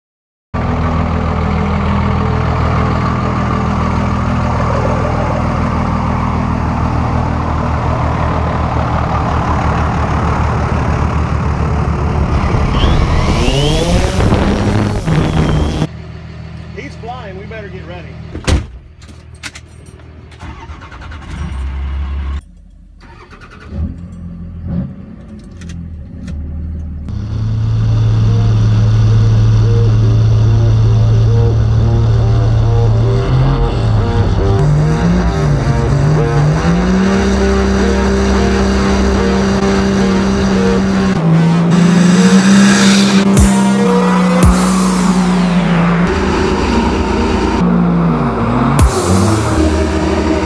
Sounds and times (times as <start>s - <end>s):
Truck: 0.6s - 50.4s.